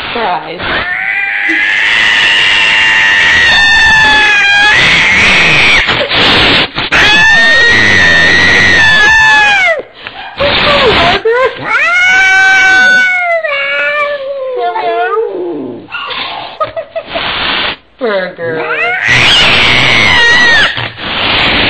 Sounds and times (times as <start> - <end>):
Speech: 0.2 - 0.7, 14.4 - 15.6, 18.0 - 18.9
Cat: 0.6 - 9.8, 11.6 - 14.2, 18.6 - 21.7.